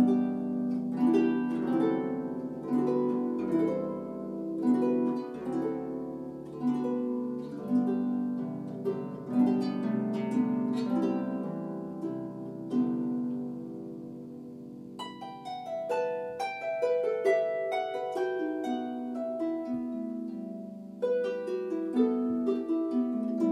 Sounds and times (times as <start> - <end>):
Harp: 0.0 - 23.5.